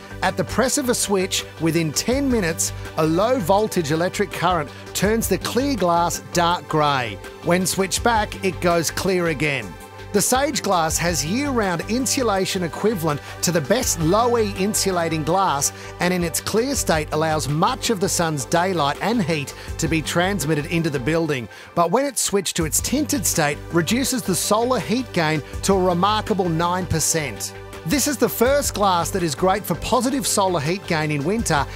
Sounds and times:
Music: 0.0s - 31.7s
Speech: 0.0s - 31.7s.

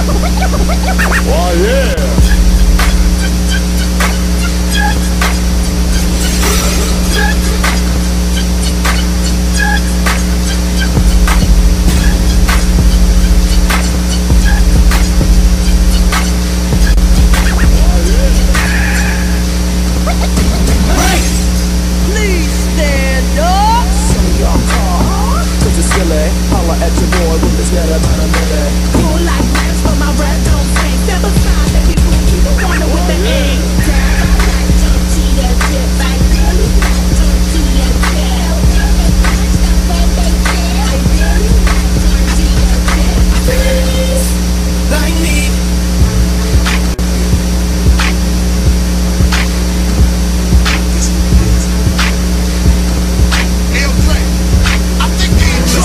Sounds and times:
Music: 0.0s - 55.8s
White noise: 0.0s - 55.8s
Speech: 1.2s - 2.2s, 22.0s - 29.2s, 32.4s - 34.1s, 53.7s - 54.4s.

